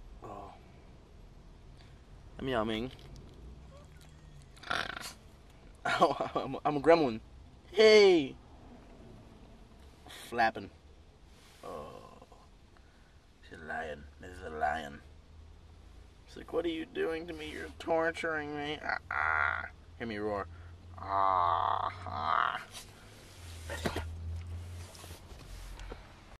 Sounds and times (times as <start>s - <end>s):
Speech: 0.2s - 0.6s, 2.4s - 3.0s, 5.9s - 8.4s, 10.1s - 10.8s, 11.6s - 12.5s, 13.4s - 15.1s, 16.3s - 22.7s.